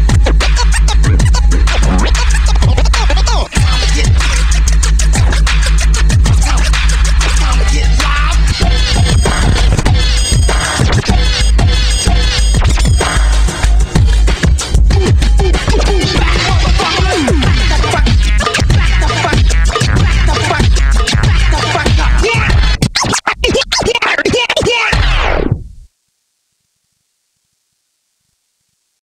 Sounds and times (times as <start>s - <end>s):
Scratching (performance technique): 0.0s - 25.8s.